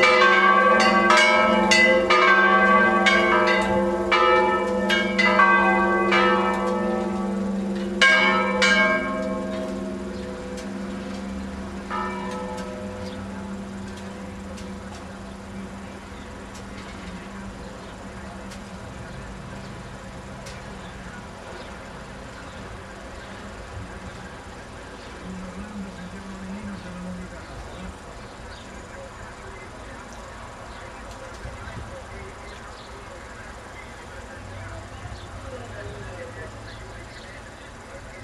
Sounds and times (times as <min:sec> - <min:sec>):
Bell: 0:00.0 - 0:15.9.